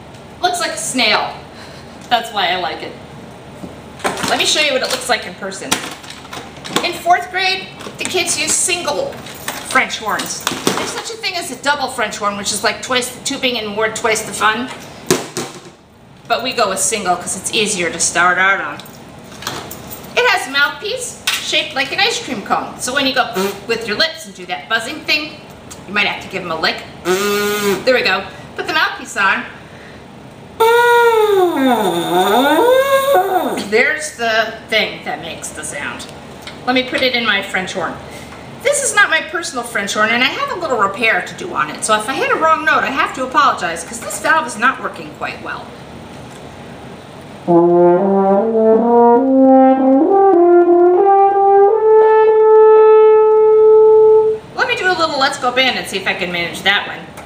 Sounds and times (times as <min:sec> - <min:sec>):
Speech: 0:00.4 - 0:01.4, 0:02.1 - 0:03.0, 0:04.2 - 0:05.9, 0:06.8 - 0:14.8, 0:16.3 - 0:18.9, 0:20.2 - 0:27.0, 0:27.9 - 0:29.6, 0:30.6 - 0:45.8, 0:54.6 - 0:57.2.